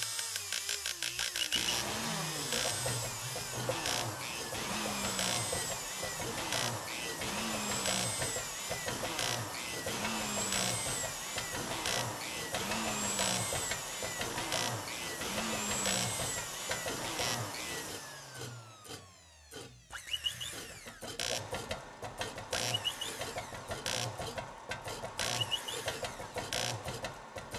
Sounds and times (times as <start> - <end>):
Power tool: 0.0 - 27.5.